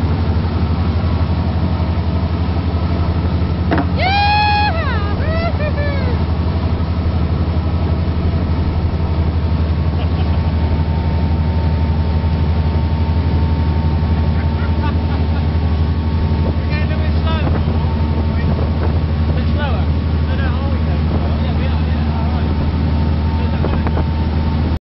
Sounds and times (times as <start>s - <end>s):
Motorboat, speedboat: 0.0s - 24.8s
Waves, surf: 0.0s - 24.8s
Wind noise (microphone): 16.2s - 19.6s, 23.5s - 24.3s.